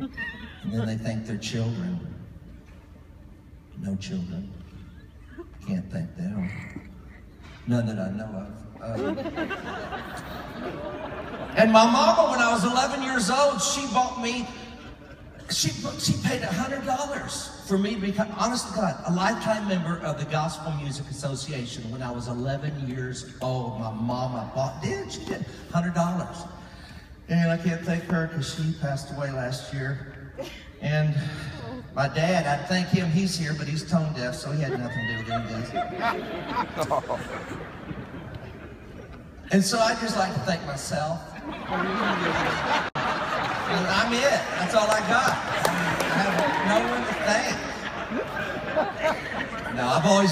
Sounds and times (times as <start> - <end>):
Male speech, man speaking: 0.7 - 2.2, 3.8 - 4.6, 5.6 - 6.8, 7.7 - 9.2, 11.6 - 14.8, 15.5 - 26.6, 27.3 - 30.1, 30.8 - 35.9, 39.5 - 41.4, 43.7 - 47.8, 49.6 - 50.3
Narration, monologue: 10.8 - 38.3, 39.2 - 41.7.